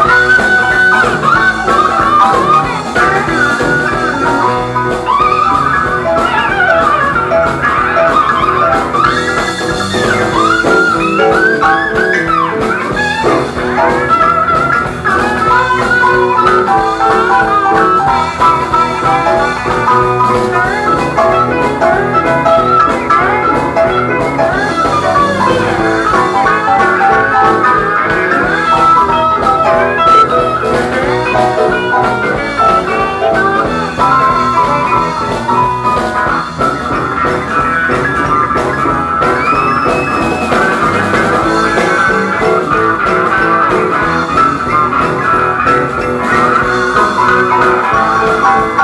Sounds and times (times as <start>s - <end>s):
Guitar: 0.0s - 48.8s.